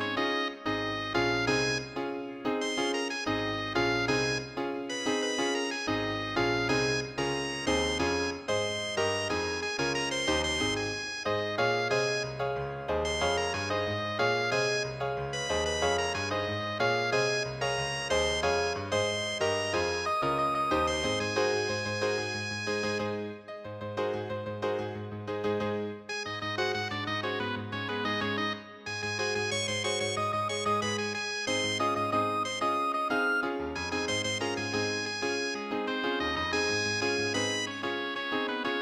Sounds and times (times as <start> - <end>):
Music: 0.0 - 38.8.